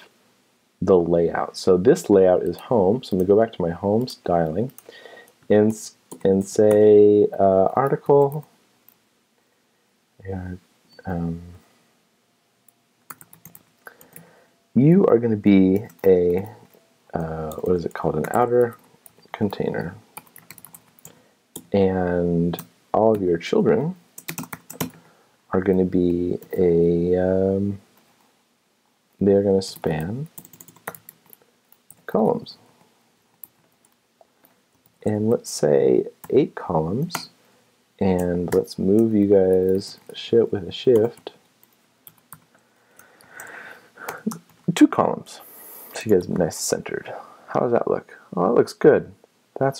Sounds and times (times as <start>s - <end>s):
Speech: 0.8s - 4.8s, 5.5s - 8.5s, 10.2s - 11.6s, 14.8s - 20.1s, 21.7s - 24.0s, 25.5s - 27.8s, 29.2s - 30.4s, 32.1s - 32.6s, 35.0s - 37.4s, 38.0s - 41.4s, 44.1s - 49.7s
Typing: 13.1s - 14.3s, 20.2s - 21.7s, 24.2s - 25.0s, 29.8s - 32.1s, 41.0s - 42.5s.